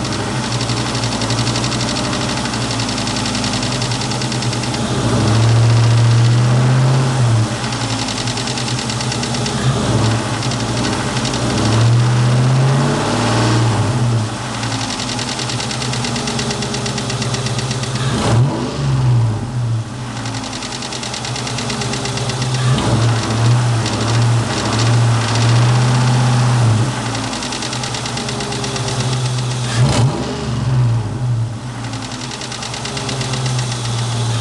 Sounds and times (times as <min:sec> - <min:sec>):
Idling: 0:00.0 - 0:12.4, 0:13.9 - 0:18.2, 0:19.3 - 0:29.9, 0:31.0 - 0:34.4
Medium engine (mid frequency): 0:00.0 - 0:34.4
Vehicle: 0:00.0 - 0:34.4
Accelerating, revving, vroom: 0:04.8 - 0:07.3, 0:11.4 - 0:14.0, 0:18.0 - 0:19.3, 0:22.6 - 0:26.9, 0:29.7 - 0:31.0.